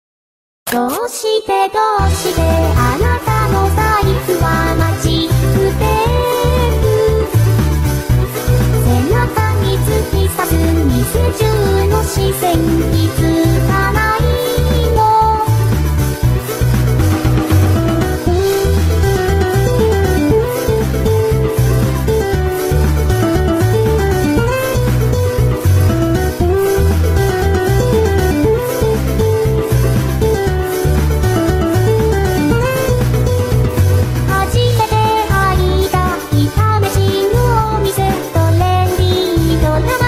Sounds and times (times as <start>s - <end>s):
Music: 0.7s - 40.0s.